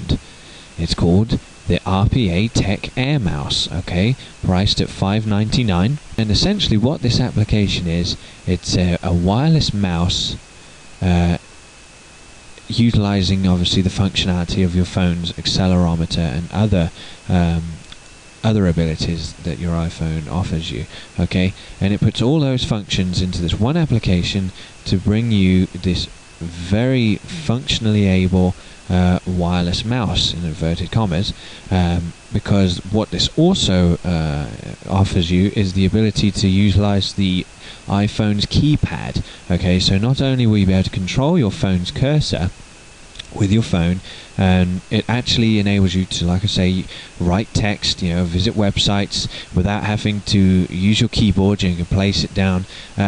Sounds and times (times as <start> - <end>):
Speech: 0.0 - 0.2, 0.8 - 10.4, 11.0 - 11.4, 12.6 - 17.8, 18.4 - 42.6, 43.2 - 53.0.